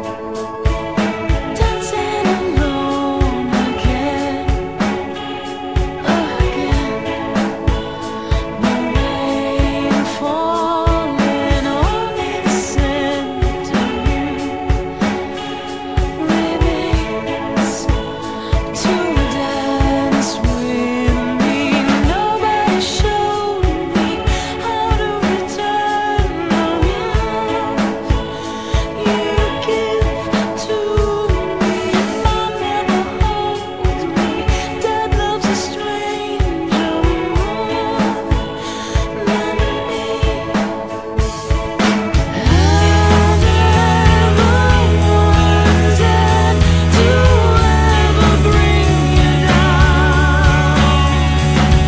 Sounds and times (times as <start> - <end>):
Music: 0.0 - 51.8.